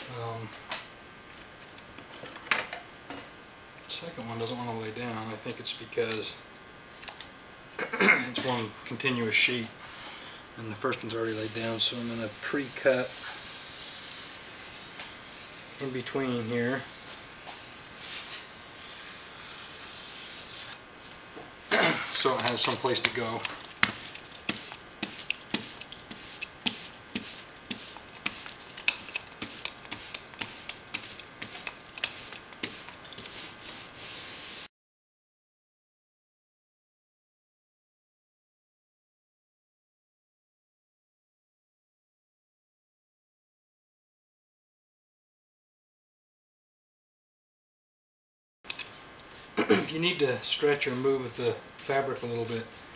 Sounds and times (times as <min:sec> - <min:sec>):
Speech: 0:00.0 - 0:00.6, 0:03.9 - 0:06.4, 0:07.8 - 0:09.8, 0:10.6 - 0:13.2, 0:15.8 - 0:16.9, 0:21.8 - 0:23.6, 0:49.6 - 0:52.8.